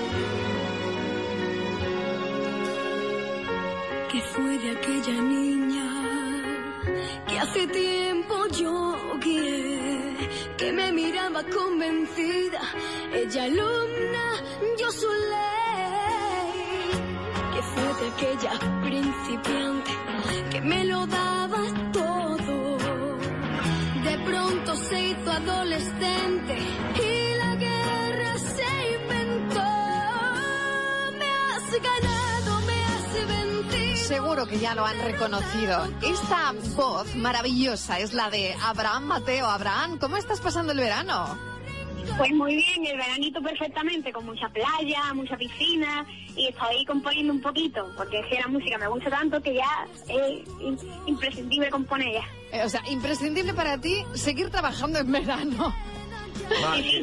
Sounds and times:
Music: 0.0s - 57.0s.

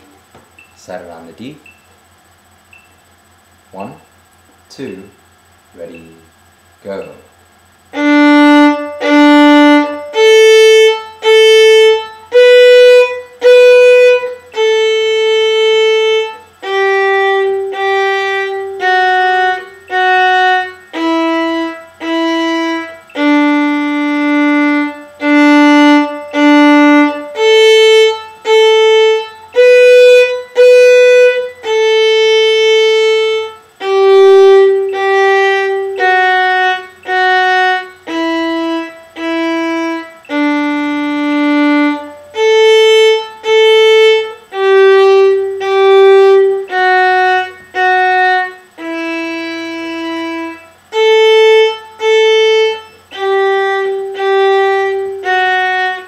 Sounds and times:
Violin, fiddle: 8.0s - 56.0s.

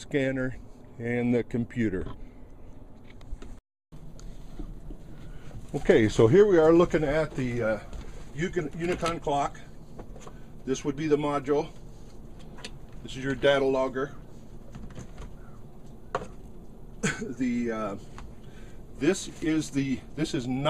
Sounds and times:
Speech: 0.0s - 2.2s, 5.7s - 9.7s, 10.7s - 11.8s, 13.0s - 14.2s, 17.2s - 18.0s, 19.0s - 20.6s.

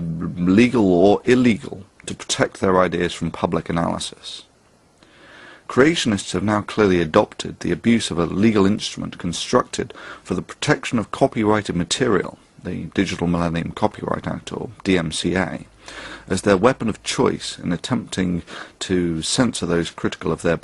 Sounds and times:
Male speech, man speaking: 0.0s - 4.5s, 5.7s - 15.7s, 16.3s - 20.6s
Narration, monologue: 0.0s - 20.6s.

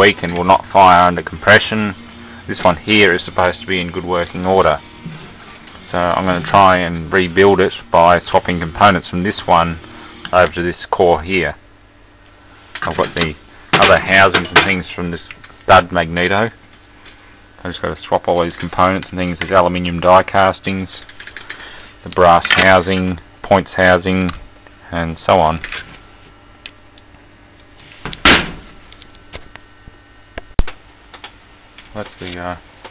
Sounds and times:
Speech: 0.0s - 4.8s, 5.9s - 11.6s, 12.8s - 16.6s, 17.6s - 21.1s, 22.0s - 25.7s, 31.9s - 32.6s.

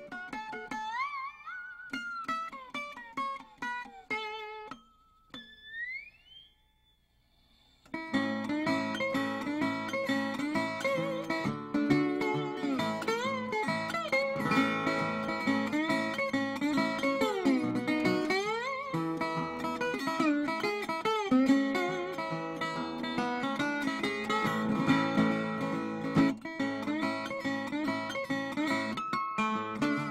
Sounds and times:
Guitar: 0.0s - 30.1s.

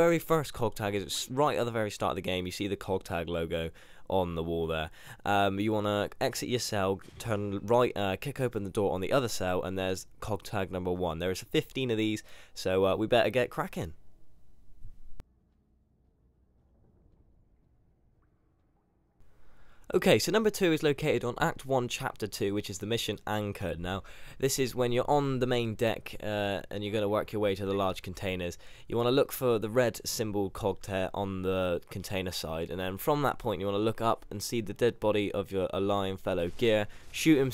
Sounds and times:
Speech: 0.0s - 14.0s, 19.9s - 37.5s.

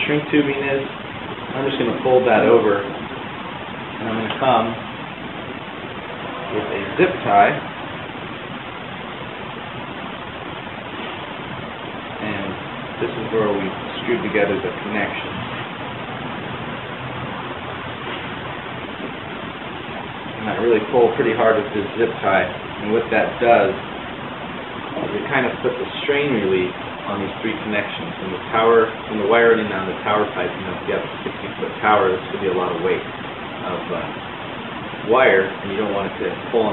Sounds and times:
Speech: 0.0s - 0.9s, 1.5s - 3.0s, 4.0s - 4.8s, 6.5s - 7.6s, 12.2s - 15.4s, 20.4s - 23.8s, 25.0s - 34.1s, 35.0s - 36.7s.

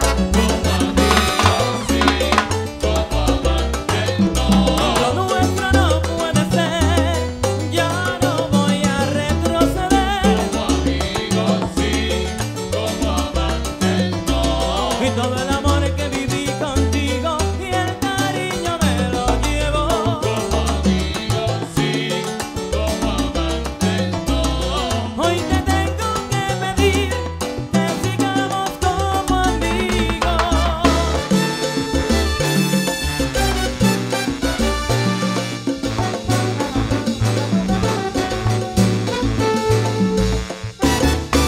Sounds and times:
Salsa music: 0.0s - 41.4s.

